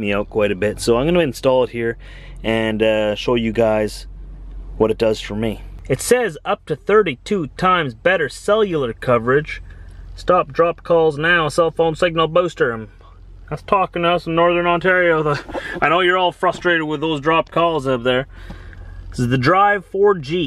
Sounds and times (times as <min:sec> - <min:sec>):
Speech: 0:00.0 - 0:04.1, 0:04.8 - 0:09.6, 0:10.2 - 0:18.3, 0:19.2 - 0:20.4.